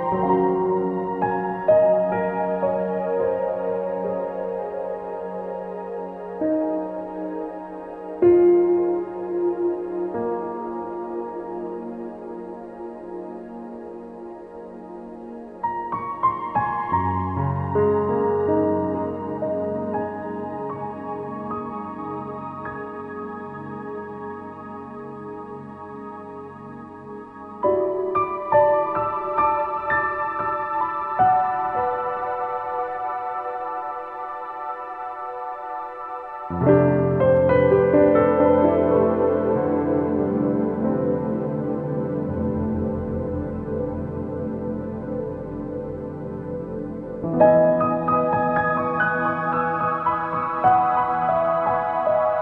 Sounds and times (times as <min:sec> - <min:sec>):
Ambient music: 0:00.0 - 0:52.4.